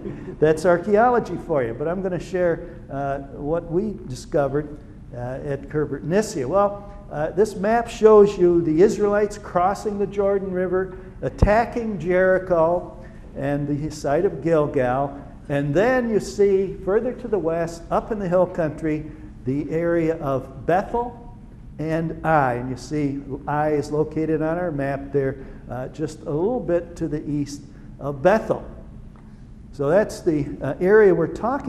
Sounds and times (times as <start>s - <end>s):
Speech: 0.0s - 21.2s, 21.8s - 28.8s, 29.8s - 31.6s.